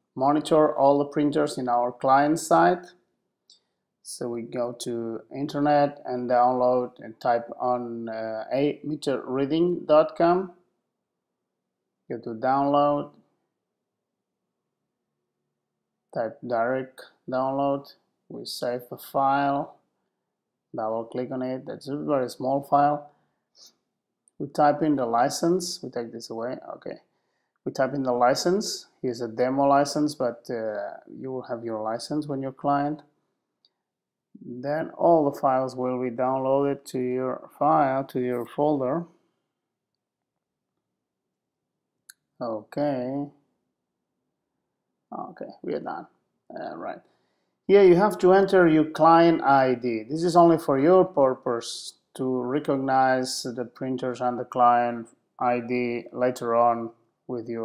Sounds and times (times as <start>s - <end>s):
Speech: 0.2s - 2.9s, 4.0s - 10.6s, 12.1s - 13.1s, 16.2s - 19.8s, 20.8s - 23.1s, 24.4s - 27.1s, 27.7s - 33.0s, 34.4s - 39.1s, 42.4s - 43.4s, 45.1s - 47.1s, 47.7s - 57.6s.